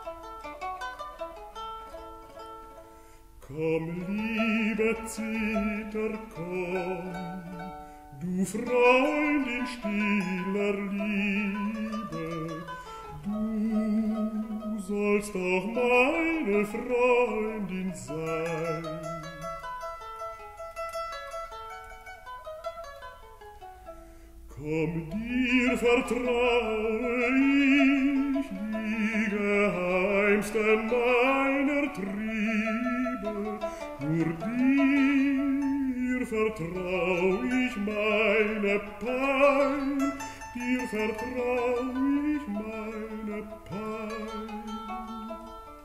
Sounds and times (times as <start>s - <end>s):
Pizzicato: 0.0s - 45.8s
Zither: 0.0s - 45.8s.